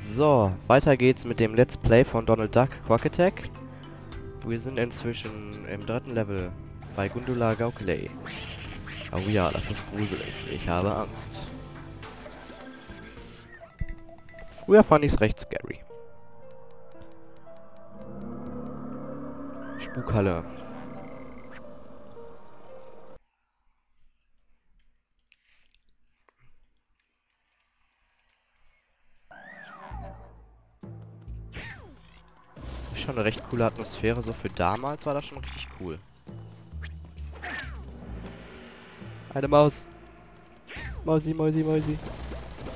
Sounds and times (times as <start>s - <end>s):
Speech: 4.4s - 8.2s, 9.1s - 11.5s, 14.7s - 15.8s, 19.8s - 20.6s, 33.0s - 36.0s, 39.3s - 39.9s, 41.0s - 42.0s.